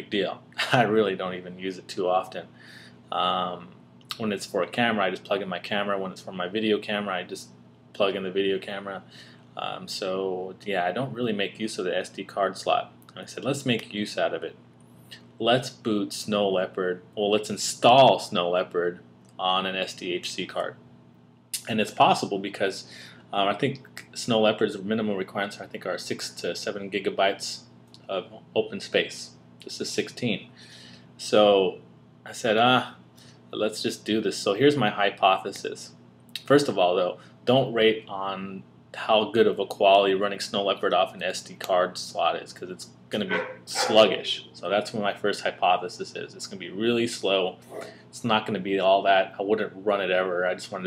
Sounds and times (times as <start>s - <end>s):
Speech: 0.0s - 2.5s, 3.1s - 14.6s, 15.2s - 20.8s, 21.6s - 30.6s, 31.2s - 50.8s.